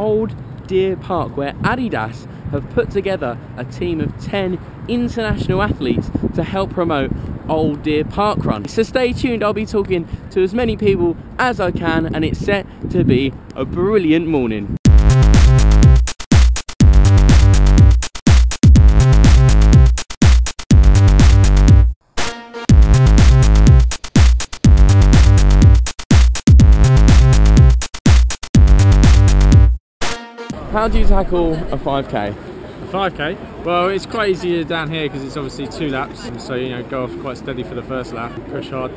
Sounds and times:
Male speech, man speaking: 0.0 - 14.8, 30.6 - 38.9
Outside, urban or manmade: 0.0 - 38.9
Music: 14.9 - 30.7.

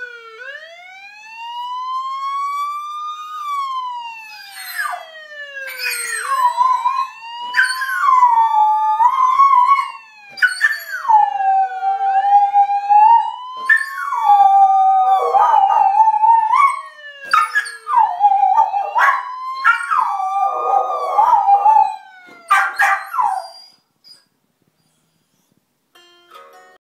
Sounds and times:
Police car (siren): 0.0 - 23.8
Bow-wow: 22.5 - 23.5
Yip: 22.5 - 24.3
Whimper (dog): 22.5 - 25.5
Music: 25.9 - 26.8.

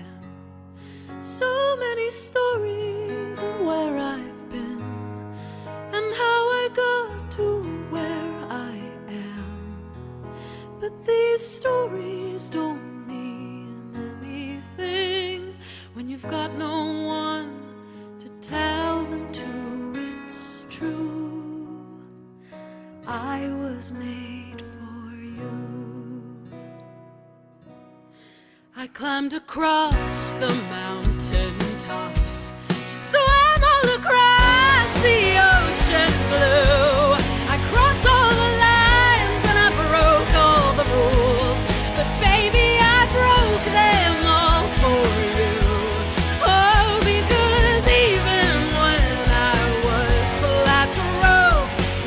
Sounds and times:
Music: 0.0 - 52.0
Female singing: 1.2 - 5.0, 5.9 - 9.7, 10.8 - 22.0, 23.0 - 26.4, 28.8 - 52.0.

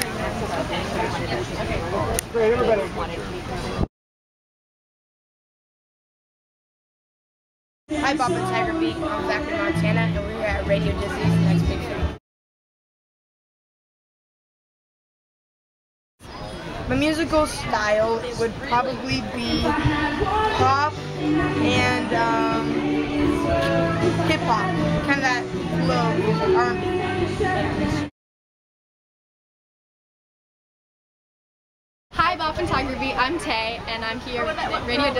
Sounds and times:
Music: 7.9 - 12.2, 19.4 - 28.1.

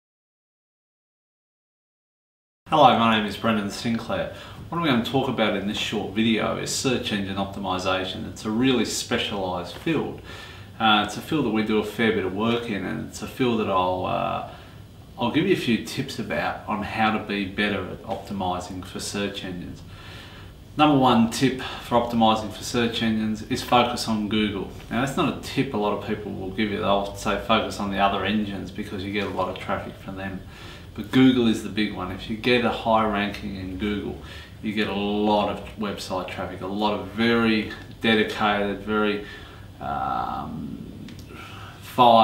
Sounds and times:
Speech: 2.7 - 14.6, 15.2 - 19.9, 20.8 - 41.0, 41.8 - 42.2.

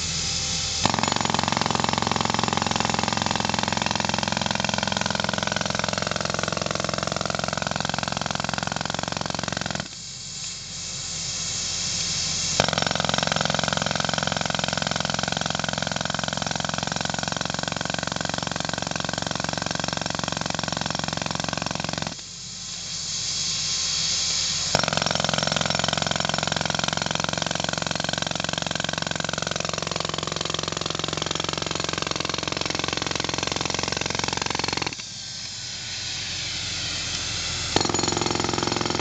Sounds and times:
Power tool: 0.0 - 39.0.

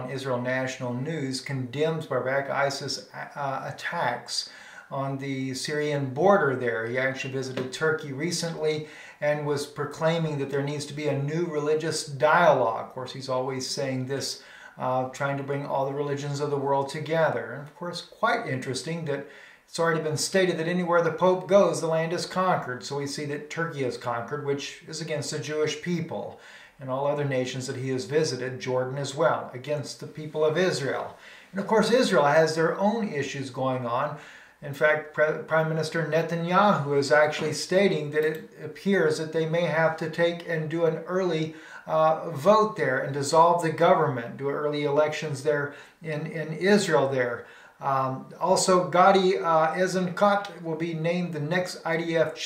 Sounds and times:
Speech: 0.0 - 52.4.

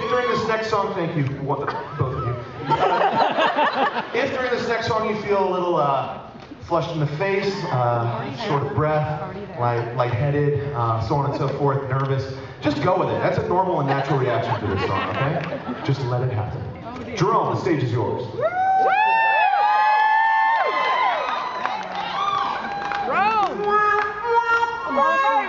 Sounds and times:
Speech: 4.2 - 18.3.

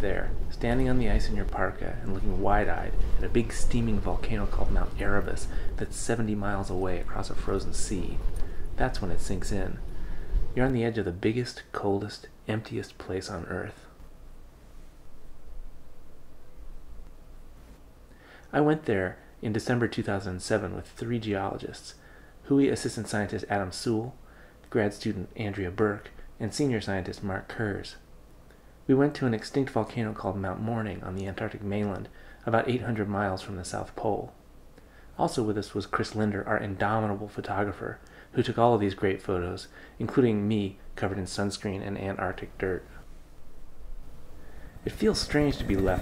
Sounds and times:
Speech: 0.0 - 9.8, 10.6 - 14.0, 18.5 - 28.1, 28.9 - 34.4, 35.2 - 43.0, 44.8 - 46.0.

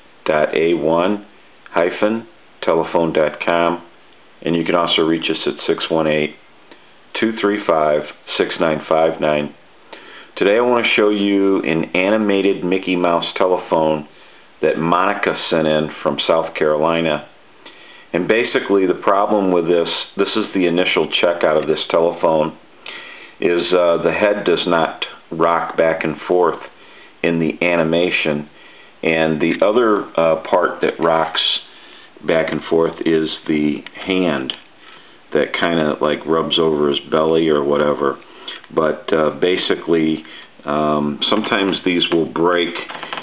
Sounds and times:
Speech: 0.2 - 6.4, 7.1 - 9.6, 10.4 - 17.4, 18.1 - 22.6, 23.4 - 34.6, 35.3 - 43.1.

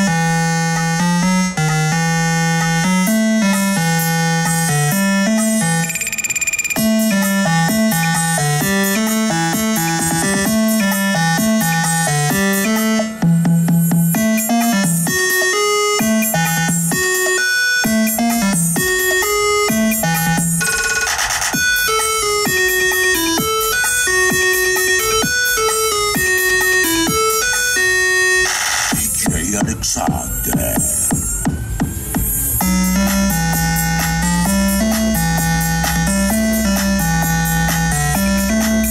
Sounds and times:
Music: 0.0 - 38.9
Speech: 29.0 - 31.1.

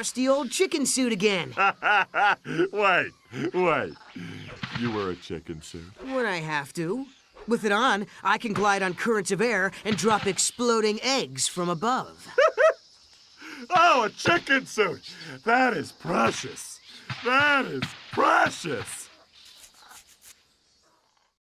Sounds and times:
Speech: 2.7 - 12.3, 13.7 - 19.1.

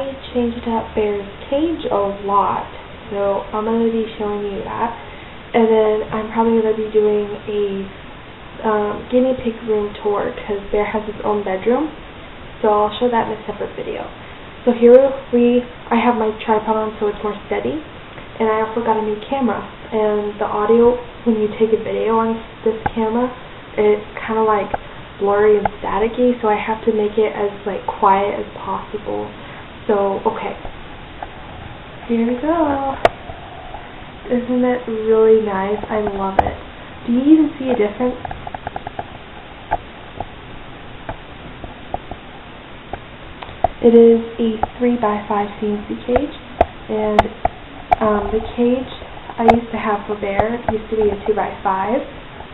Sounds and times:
Speech: 0.0 - 7.9, 8.6 - 12.0, 12.6 - 30.6, 32.1 - 33.1, 34.3 - 38.3, 43.8 - 47.4, 48.0 - 52.2.

